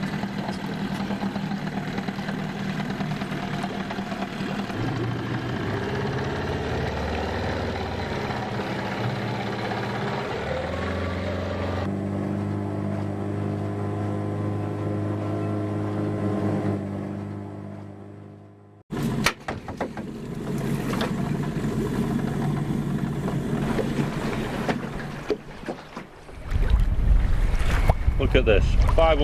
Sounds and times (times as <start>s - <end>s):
Motorboat, speedboat: 0.0s - 29.2s.